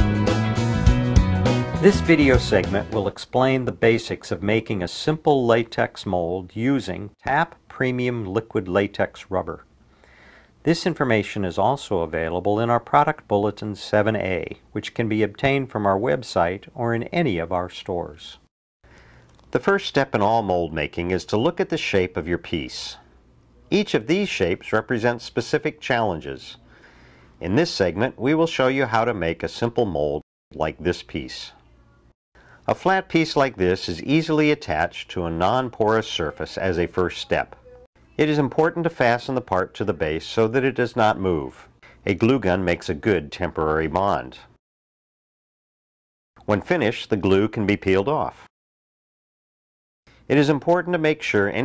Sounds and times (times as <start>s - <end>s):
Speech: 1.8s - 9.7s, 10.6s - 18.5s, 19.5s - 26.6s, 27.4s - 32.0s, 32.7s - 44.6s, 46.4s - 48.5s, 50.3s - 51.6s.